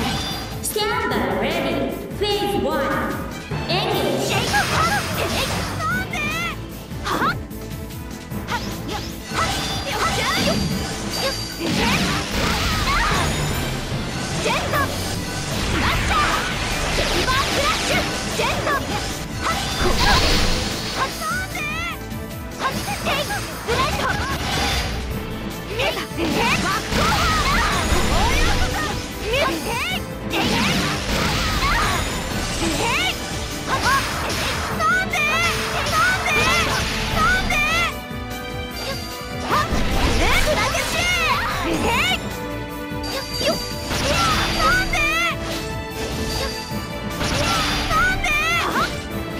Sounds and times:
Music: 0:00.0 - 0:49.3.

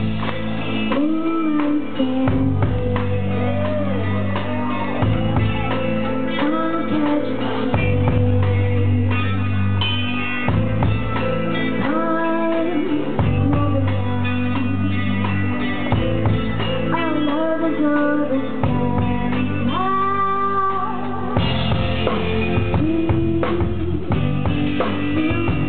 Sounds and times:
Independent music: 0:00.0 - 0:25.6.

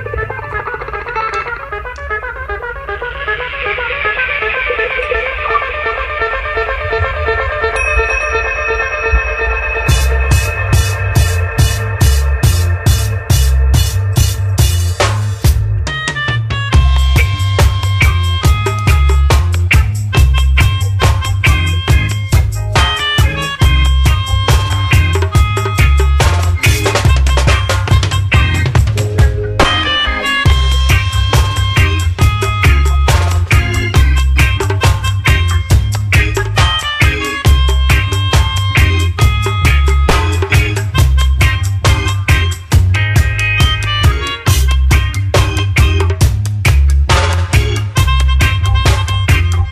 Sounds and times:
Music: 0:00.0 - 0:49.7.

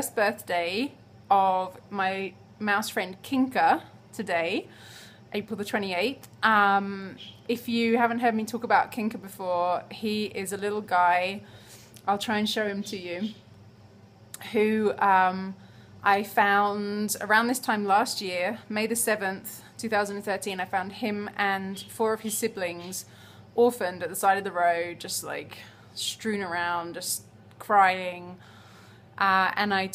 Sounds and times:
Speech: 0:00.0 - 0:04.7, 0:05.4 - 0:11.4, 0:12.1 - 0:13.4, 0:14.4 - 0:28.4, 0:29.2 - 0:29.9.

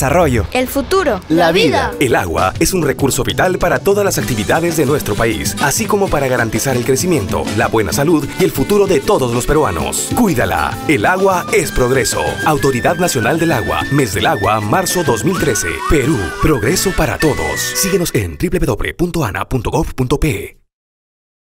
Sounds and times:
Speech: 0:00.0 - 0:20.7
Music: 0:01.1 - 0:18.7.

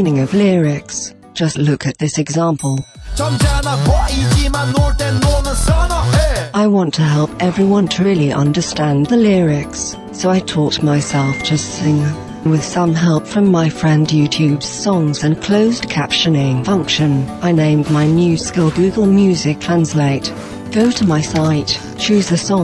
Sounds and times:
Speech: 0:00.0 - 0:02.8, 0:06.6 - 0:22.6
Music: 0:00.0 - 0:22.6.

